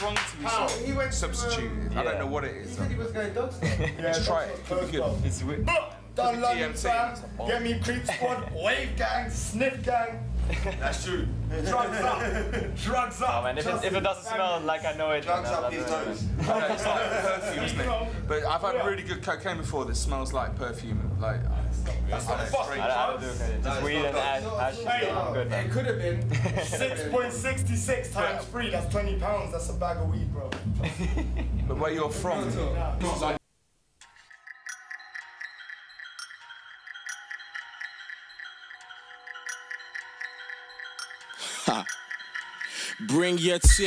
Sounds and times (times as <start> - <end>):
Music: 0.0 - 33.4, 34.0 - 43.8.